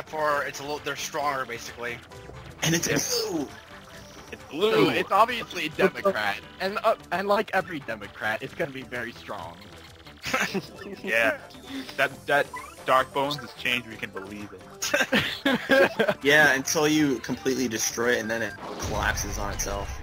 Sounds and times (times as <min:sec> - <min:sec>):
Speech: 0:00.0 - 0:02.0, 0:04.5 - 0:09.6, 0:16.3 - 0:20.0
Music: 0:00.0 - 0:20.0.